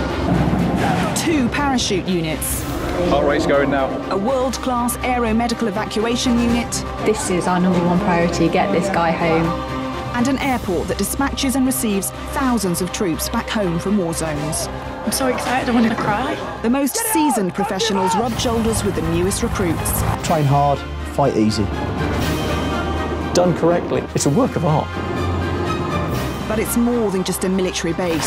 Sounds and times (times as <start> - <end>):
Music: 0.0 - 28.2.